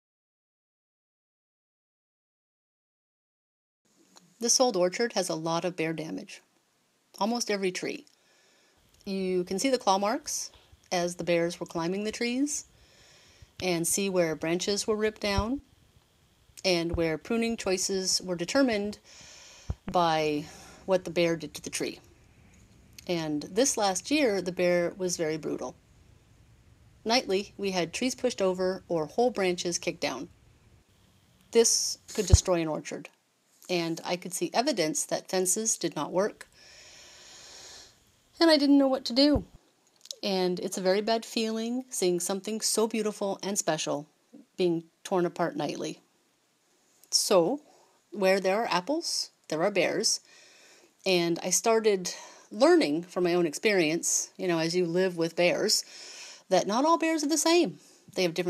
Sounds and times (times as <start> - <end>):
Speech: 4.4 - 6.4, 7.2 - 8.1, 9.1 - 12.6, 13.6 - 15.6, 16.6 - 19.0, 19.9 - 22.0, 23.0 - 25.7, 27.1 - 30.3, 31.6 - 33.1, 33.7 - 36.4, 38.4 - 46.0, 47.1 - 47.6, 48.2 - 50.2, 51.0 - 55.8, 56.5 - 58.4.